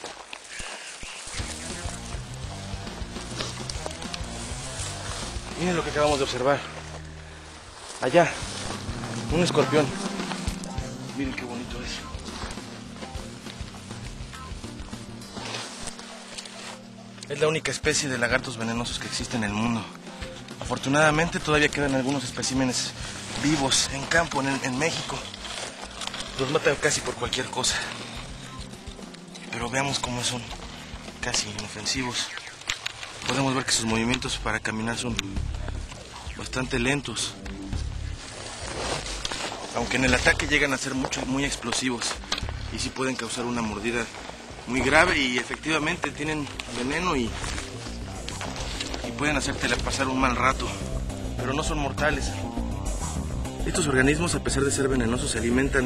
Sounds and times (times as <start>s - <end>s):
Outside, rural or natural: 0.0s - 55.8s
Music: 1.2s - 55.8s
Speech: 5.6s - 6.7s, 8.0s - 8.5s, 9.3s - 10.0s, 11.1s - 12.1s, 17.3s - 19.9s, 20.6s - 25.3s, 26.4s - 28.0s, 29.5s - 30.6s, 31.2s - 32.4s, 33.3s - 35.5s, 36.2s - 37.5s, 39.8s - 44.1s, 44.7s - 47.4s, 49.0s - 50.8s, 51.4s - 52.4s, 53.7s - 55.8s.